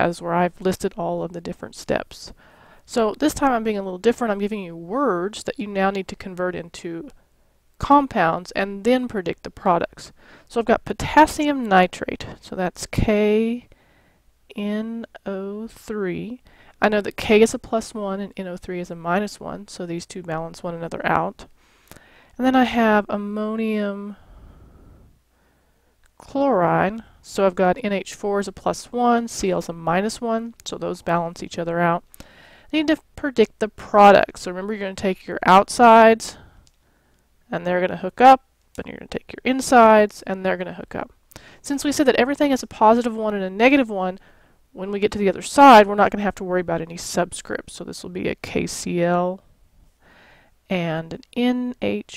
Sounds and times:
Speech: 0.0s - 7.2s, 7.8s - 13.7s, 14.5s - 21.5s, 22.4s - 24.2s, 26.2s - 32.0s, 32.8s - 36.4s, 37.5s - 44.2s, 44.8s - 49.4s, 50.7s - 52.1s.

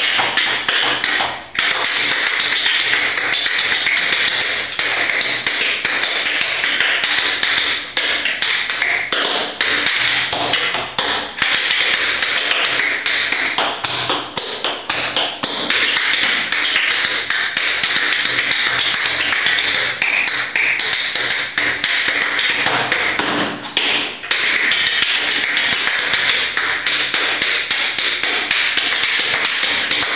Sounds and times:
Tap: 0.0s - 30.1s.

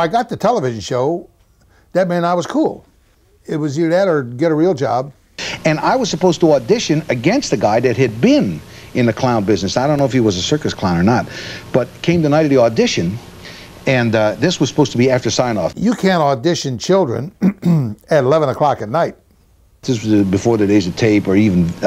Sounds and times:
Speech: 0.0s - 1.3s, 2.0s - 13.2s, 13.9s - 19.2s, 19.8s - 21.8s.

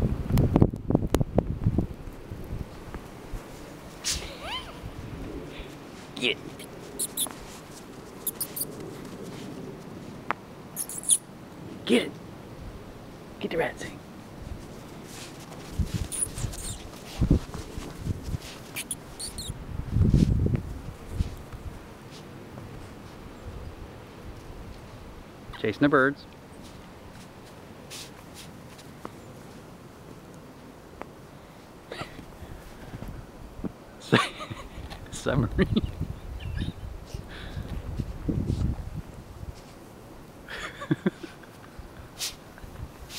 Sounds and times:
Domestic animals, pets: 6.5s - 7.6s, 8.2s - 9.4s, 10.8s - 11.2s, 16.0s - 16.9s, 18.6s - 19.6s.

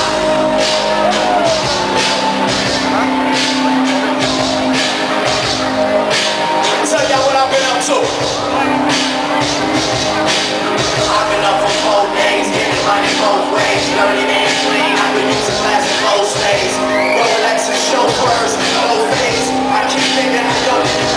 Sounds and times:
Rhythm and blues: 0.0s - 21.1s
Speech: 6.6s - 9.0s.

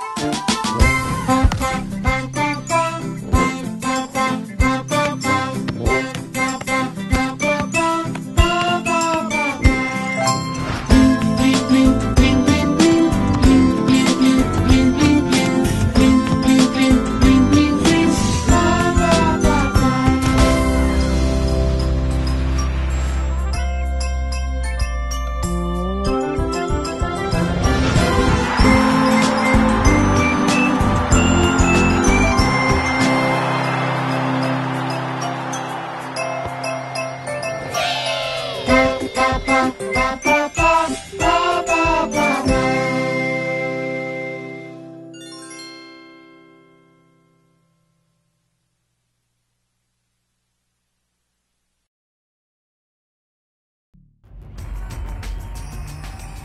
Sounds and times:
Jingle, tinkle: 0.0s - 48.0s, 55.1s - 56.4s
Music for children: 0.0s - 48.0s.

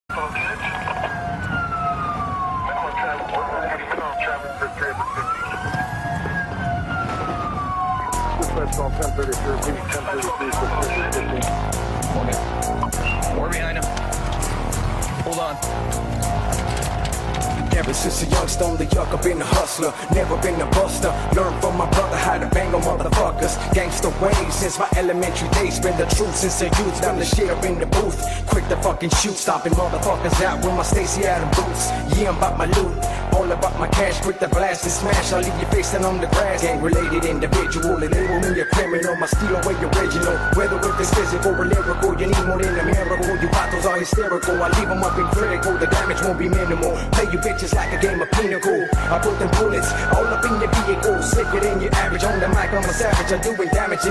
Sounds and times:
Speech: 0.0s - 1.1s, 2.7s - 5.6s, 8.4s - 12.4s, 13.2s - 14.0s, 15.2s - 15.6s
Police car (siren): 0.0s - 13.5s, 14.9s - 54.1s
Music: 0.0s - 54.1s.

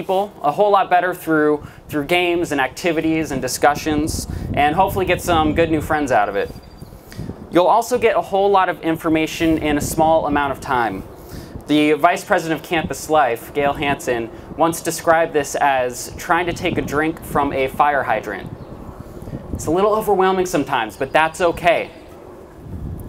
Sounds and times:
Male speech, man speaking: 0.0s - 6.6s, 7.6s - 11.0s, 11.7s - 18.5s, 19.6s - 22.0s
Narration, monologue: 0.0s - 23.0s.

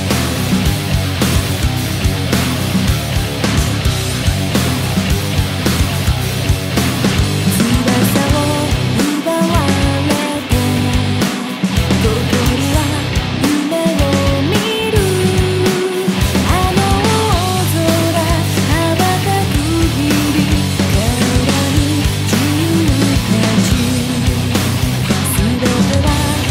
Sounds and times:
Music: 0.0s - 26.5s.

